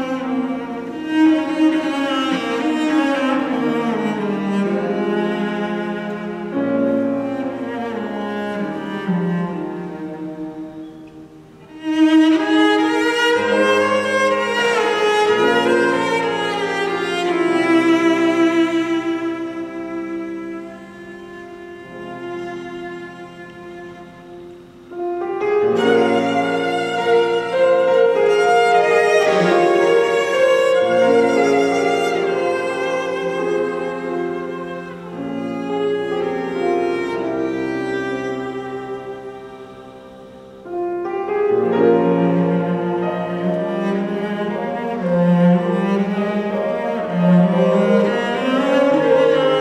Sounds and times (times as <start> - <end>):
Cello: 0.0 - 49.6.